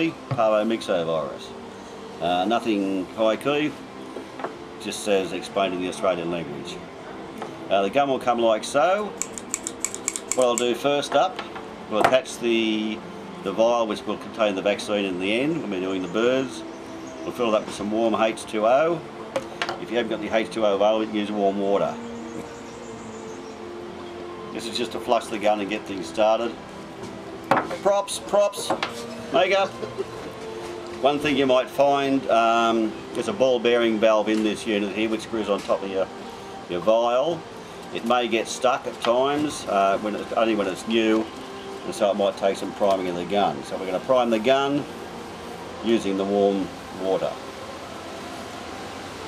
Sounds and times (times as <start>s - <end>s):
Speech: 0.0s - 1.5s, 2.2s - 3.8s, 4.8s - 6.8s, 7.7s - 9.1s, 10.4s - 16.6s, 17.3s - 19.0s, 19.8s - 22.0s, 24.6s - 26.6s, 29.4s - 29.7s, 31.0s - 36.1s, 36.7s - 37.4s, 38.0s - 41.3s, 41.9s - 44.9s, 45.8s - 47.4s
Music: 0.0s - 49.2s.